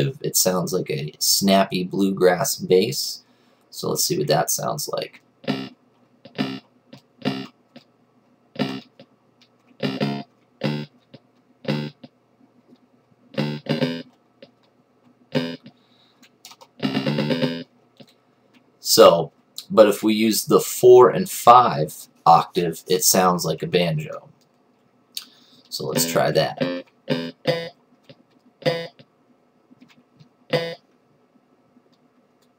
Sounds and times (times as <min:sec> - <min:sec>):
Speech: 0:00.0 - 0:05.2, 0:18.8 - 0:24.4, 0:25.7 - 0:26.6.